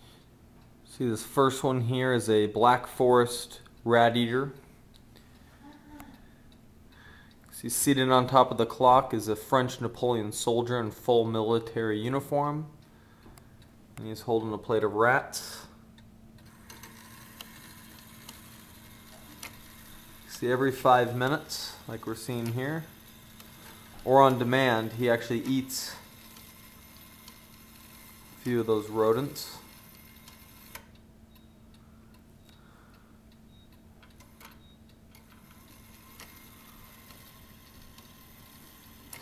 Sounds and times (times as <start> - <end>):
Speech: 0.9 - 4.6, 7.5 - 12.8, 14.0 - 15.8, 20.3 - 22.9, 24.0 - 26.1, 28.4 - 29.7.